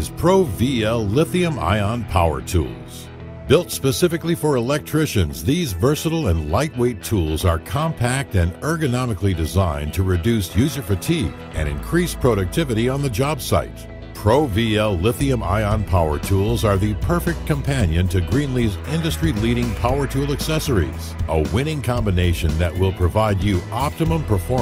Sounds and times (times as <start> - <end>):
Music: 0.0 - 24.6
Speech: 0.0 - 24.6.